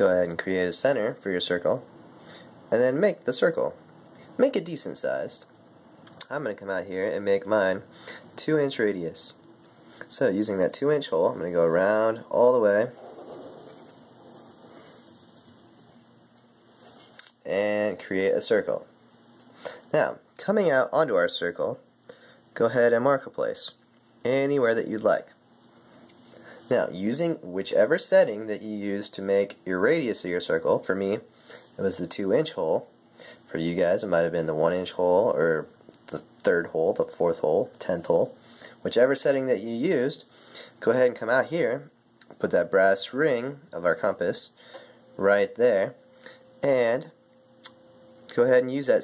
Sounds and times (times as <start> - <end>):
Speech: 0.0 - 1.9, 2.7 - 3.8, 4.4 - 5.6, 6.2 - 9.4, 10.1 - 13.0, 17.4 - 18.9, 19.9 - 21.9, 22.6 - 25.4, 26.7 - 32.9, 33.5 - 44.6, 45.2 - 46.0, 46.6 - 47.2, 48.3 - 49.0.